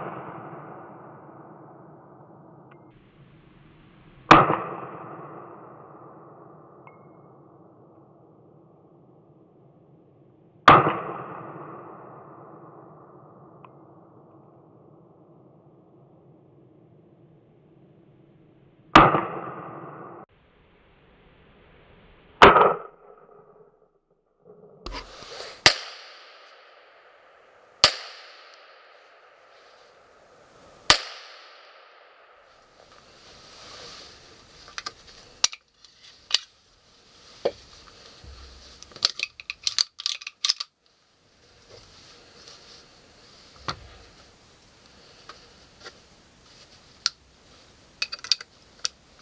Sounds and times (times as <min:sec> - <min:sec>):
Outside, rural or natural: 0:00.0 - 0:49.2.